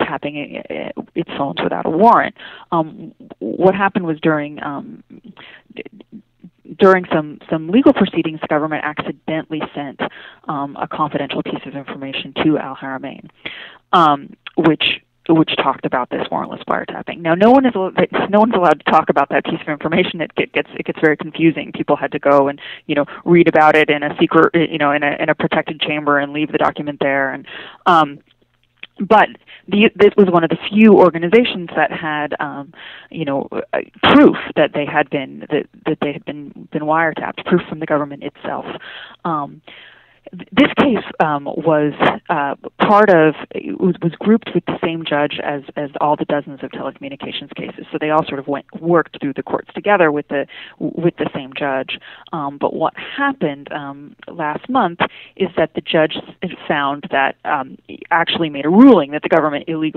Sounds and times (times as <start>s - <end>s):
Speech: 0.0s - 28.2s, 28.8s - 59.9s.